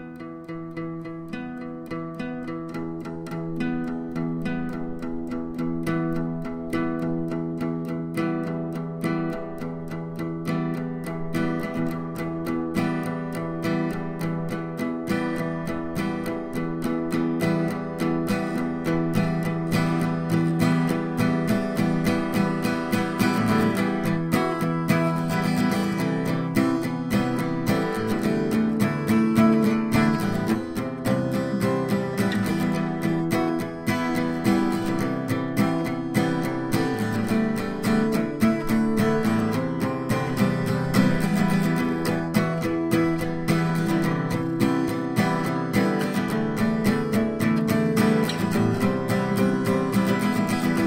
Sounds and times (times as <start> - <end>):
Acoustic guitar: 0.0 - 50.8
Strum: 0.0 - 50.8.